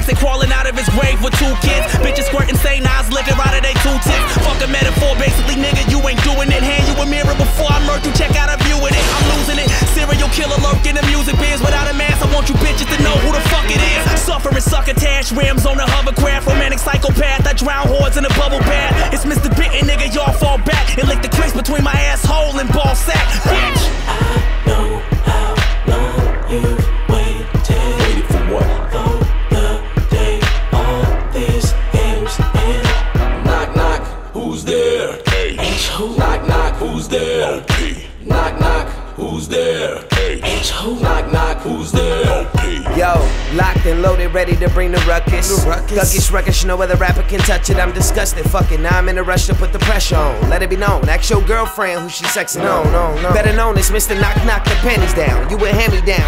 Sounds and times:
Hip hop music: 0.0 - 56.2.

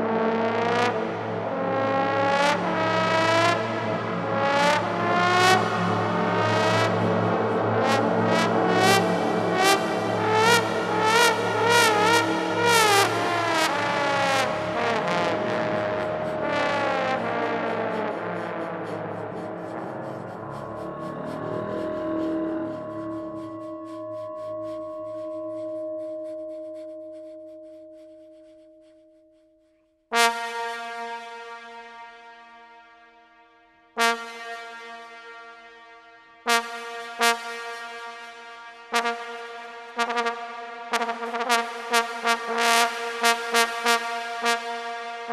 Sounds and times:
Brass instrument: 0.0 - 23.9, 30.2 - 32.8, 34.0 - 45.3.

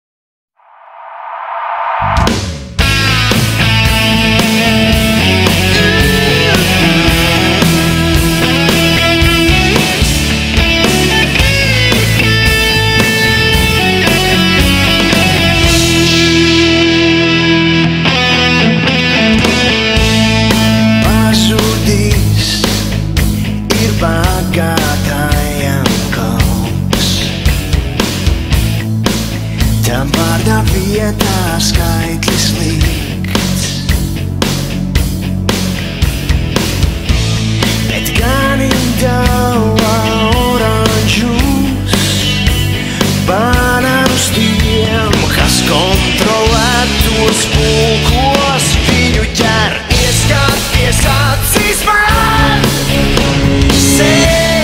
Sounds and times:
Progressive rock: 0.7 - 54.6
Guitar: 2.1 - 54.6.

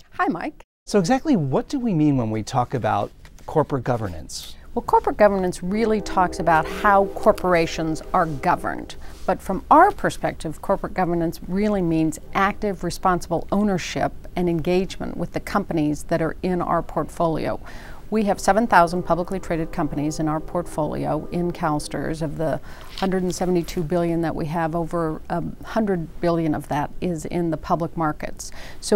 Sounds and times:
Speech: 0.2 - 28.9
Music: 5.1 - 13.1, 17.4 - 23.7.

